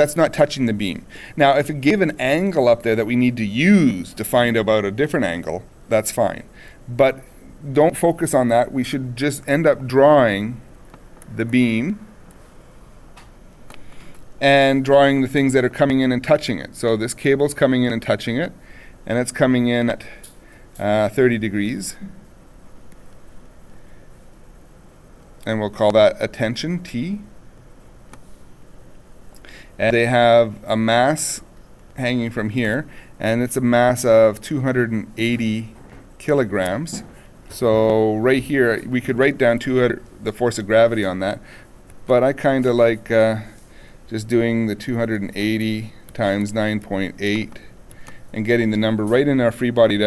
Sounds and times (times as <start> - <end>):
Speech: 0.0 - 10.6, 11.3 - 12.1, 14.4 - 20.2, 20.8 - 22.2, 25.4 - 27.4, 29.8 - 41.4, 42.1 - 47.7, 48.3 - 50.0.